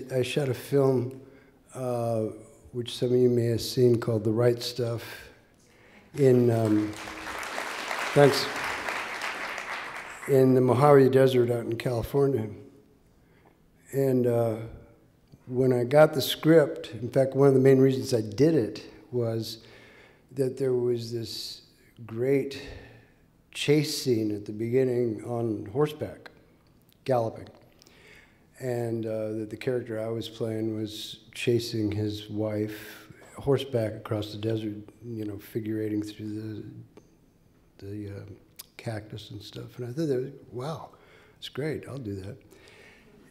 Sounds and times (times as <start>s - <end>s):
Speech: 0.0s - 5.4s, 6.1s - 7.0s, 8.1s - 8.6s, 10.2s - 12.7s, 13.9s - 14.9s, 15.5s - 19.6s, 20.3s - 22.8s, 23.5s - 26.4s, 27.0s - 27.6s, 28.6s - 36.9s, 37.8s - 42.4s.